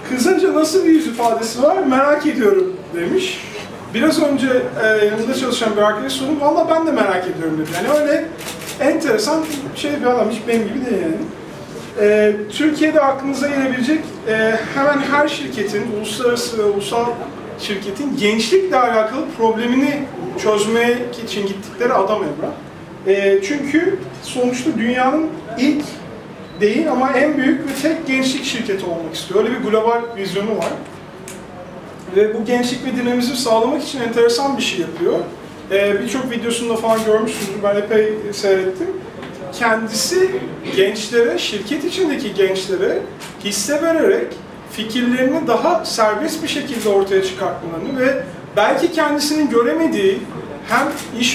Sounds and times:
Speech: 0.0s - 51.3s.

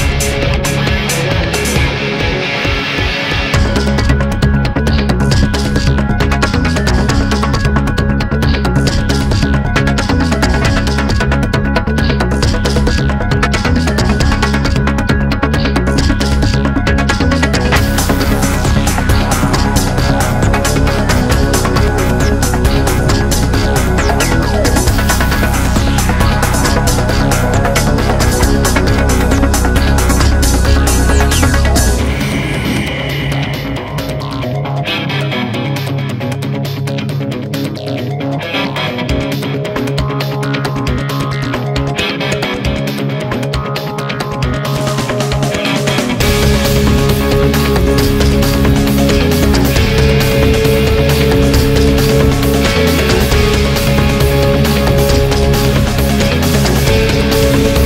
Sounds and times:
Music: 0.0s - 57.8s.

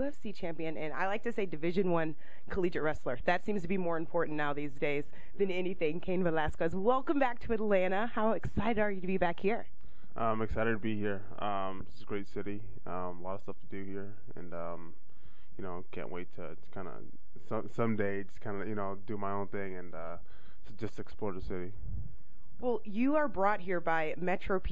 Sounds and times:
Speech: 0.0s - 9.6s, 10.2s - 14.9s, 15.6s - 21.7s, 22.6s - 24.7s.

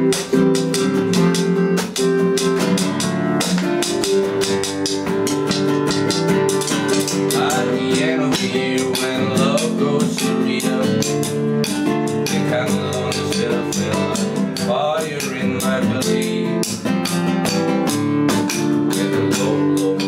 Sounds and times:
Music: 0.0s - 20.0s.

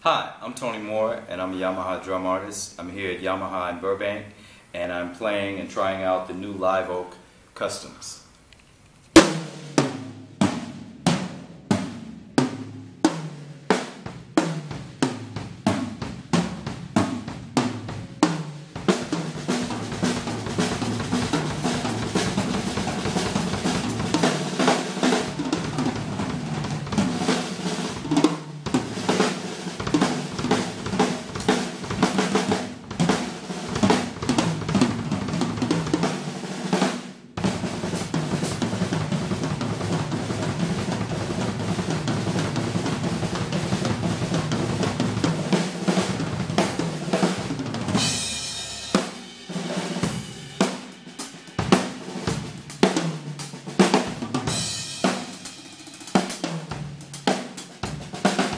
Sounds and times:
Drum machine: 14.1s - 36.2s, 54.0s - 58.5s
Bass drum: 18.8s - 36.1s.

